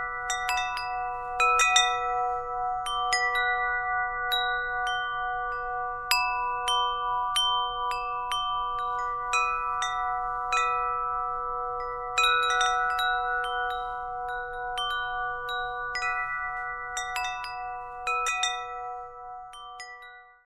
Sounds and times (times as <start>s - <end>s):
Wind chime: 0.0s - 20.4s.